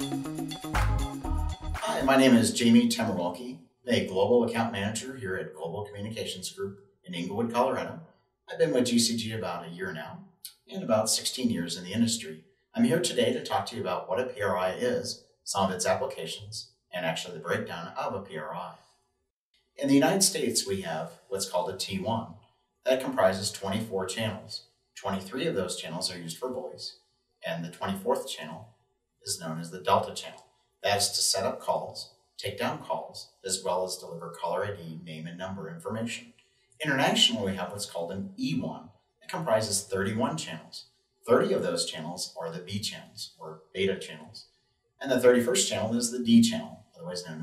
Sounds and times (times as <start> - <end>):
Speech: 1.8 - 18.8, 19.8 - 28.6, 29.3 - 44.4, 45.0 - 47.4.